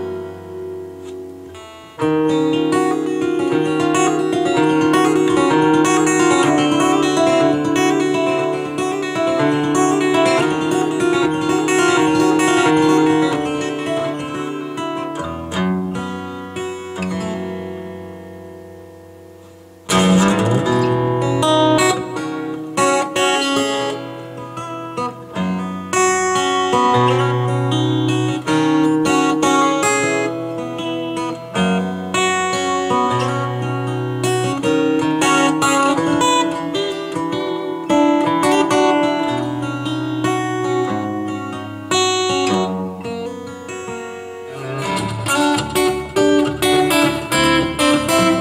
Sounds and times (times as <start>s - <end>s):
Steel guitar, slide guitar: 0.0s - 48.4s.